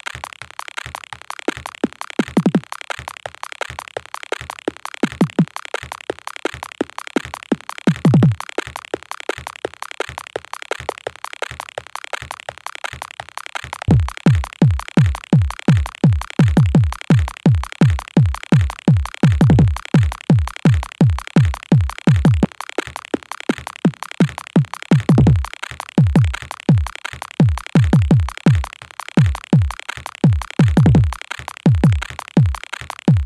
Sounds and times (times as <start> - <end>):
Music: 0.0 - 33.2.